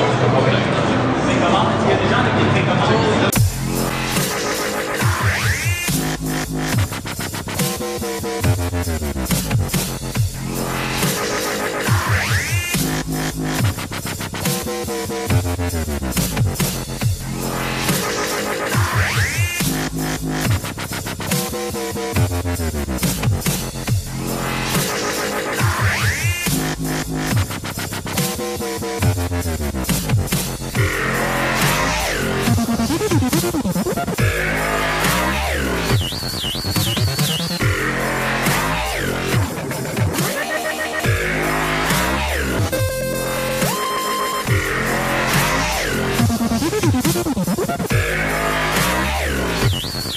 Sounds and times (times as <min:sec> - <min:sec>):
Dubstep: 0:03.3 - 0:50.1.